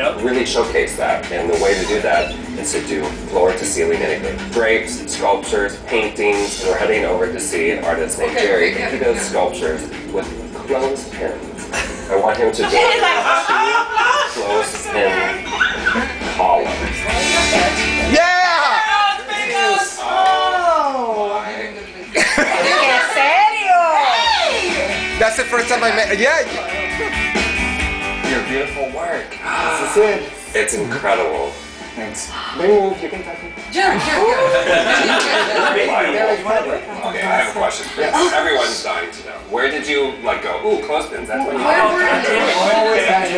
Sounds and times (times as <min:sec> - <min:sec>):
Music: 0:00.0 - 0:43.3.